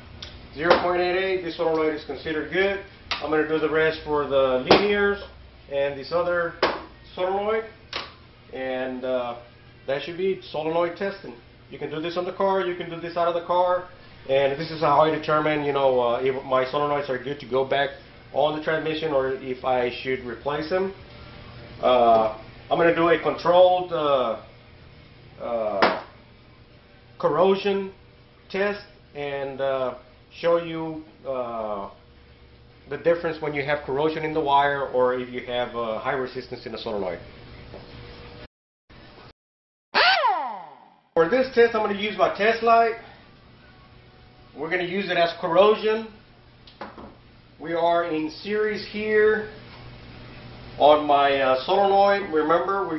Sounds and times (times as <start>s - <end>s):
Speech: 0.6s - 7.8s, 8.5s - 21.0s, 21.8s - 24.5s, 25.4s - 25.9s, 27.2s - 32.0s, 32.9s - 37.3s, 41.2s - 43.0s, 44.6s - 46.2s, 47.6s - 49.6s, 50.8s - 52.9s.